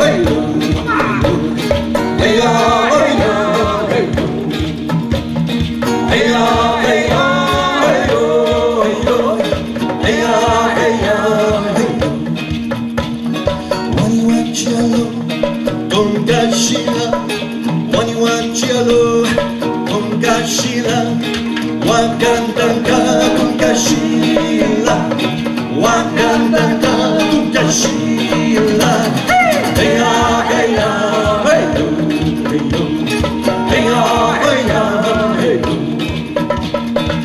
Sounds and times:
Singing: 0.0s - 5.0s, 5.9s - 12.6s, 13.9s - 36.5s
Music: 0.0s - 37.2s.

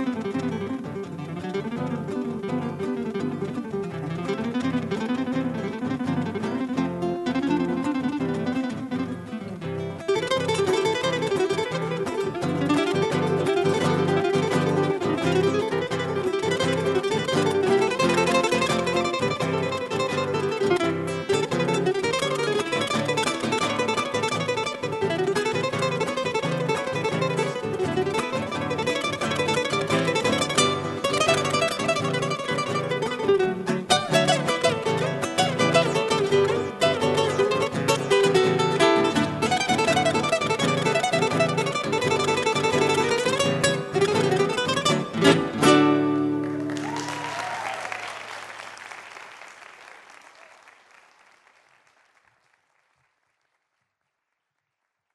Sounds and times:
Guitar: 0.0s - 48.8s.

